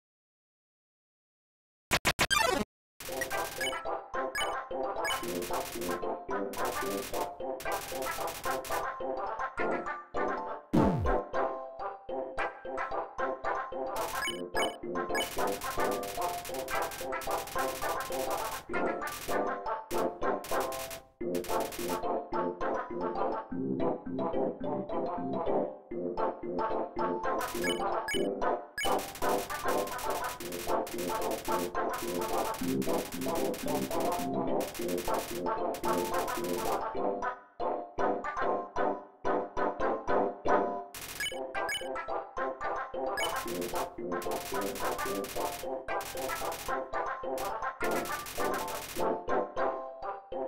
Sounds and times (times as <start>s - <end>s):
Music: 3.1s - 50.4s.